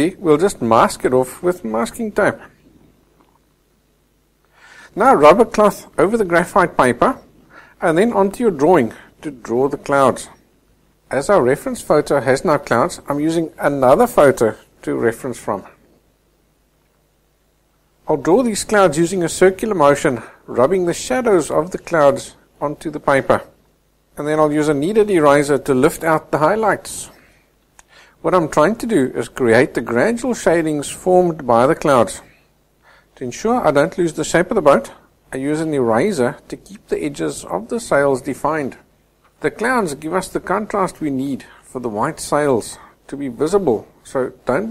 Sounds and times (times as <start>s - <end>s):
Speech: 0.0s - 2.6s, 4.9s - 10.4s, 11.1s - 15.8s, 18.0s - 23.6s, 24.2s - 27.2s, 28.2s - 32.4s, 33.2s - 44.7s.